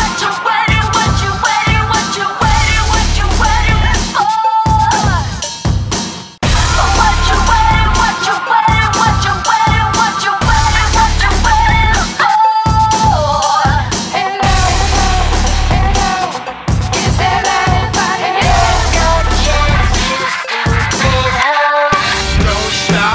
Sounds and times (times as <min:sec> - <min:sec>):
Music: 0:00.0 - 0:23.1.